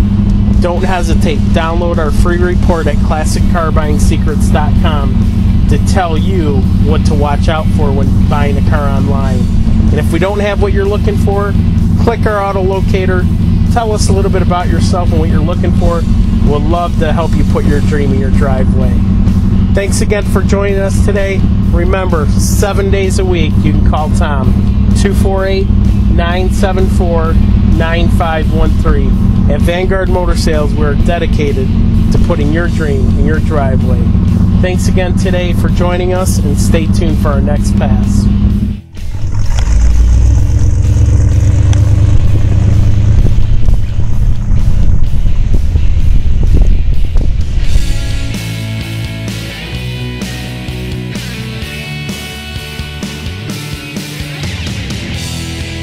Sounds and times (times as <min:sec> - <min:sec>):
Music: 0:00.0 - 0:40.1, 0:42.2 - 0:55.8
Car: 0:00.0 - 0:55.8
Outside, urban or manmade: 0:00.0 - 0:55.8.